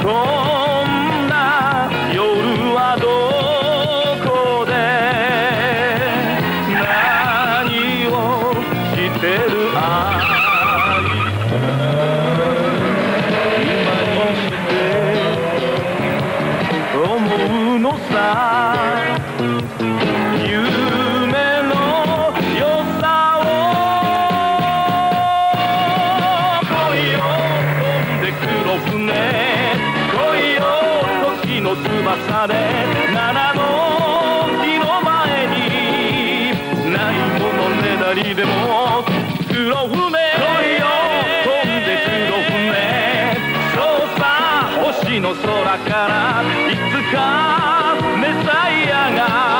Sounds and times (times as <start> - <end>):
Music: 0.0 - 49.5.